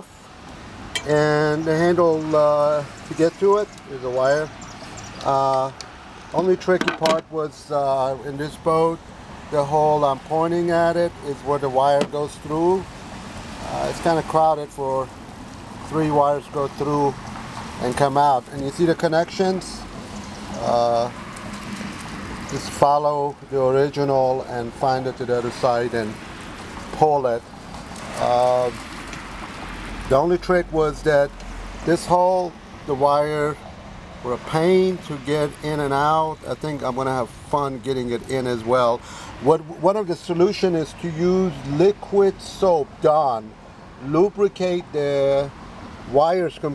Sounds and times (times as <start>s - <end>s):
Speech: 1.0s - 4.6s, 5.2s - 5.8s, 6.4s - 12.9s, 13.6s - 15.1s, 15.9s - 17.2s, 17.8s - 19.9s, 20.6s - 21.2s, 22.5s - 26.2s, 27.0s - 27.4s, 28.2s - 28.8s, 30.1s - 33.6s, 34.2s - 45.5s, 46.1s - 46.7s.